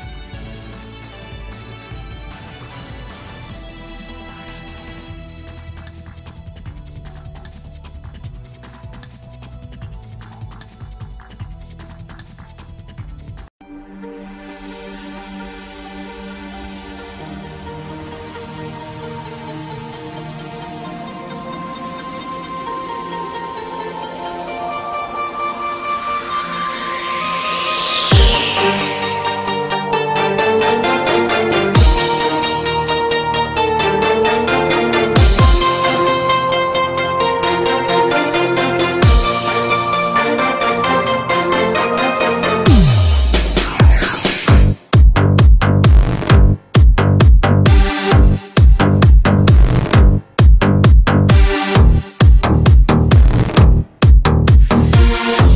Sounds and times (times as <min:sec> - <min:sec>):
Music: 0:00.0 - 0:55.5.